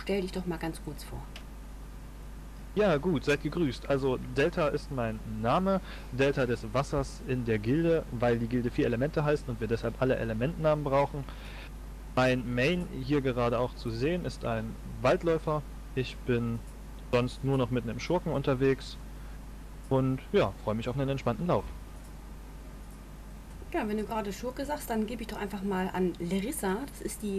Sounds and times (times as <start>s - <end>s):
Speech: 0.0s - 1.3s, 2.8s - 11.3s, 12.2s - 16.6s, 17.2s - 19.0s, 19.9s - 21.8s, 23.7s - 27.3s.